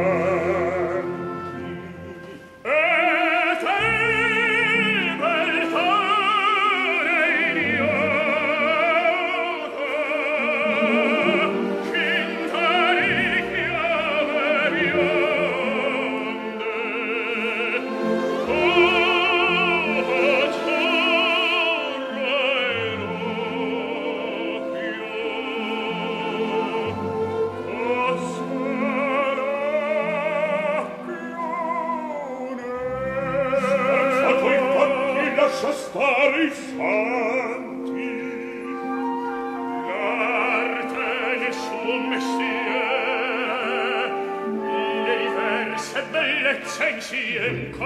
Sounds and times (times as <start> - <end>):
Opera: 0.0 - 47.8.